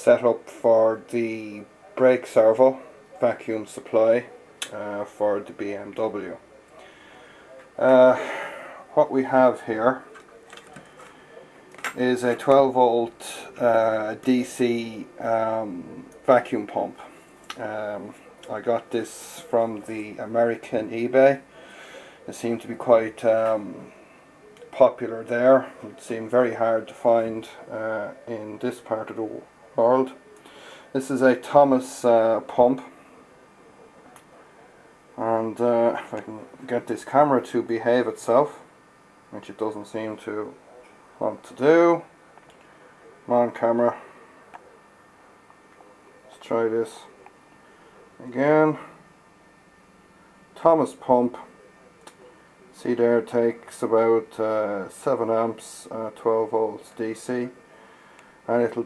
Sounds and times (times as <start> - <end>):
Speech: 0.0 - 49.6, 50.6 - 58.8.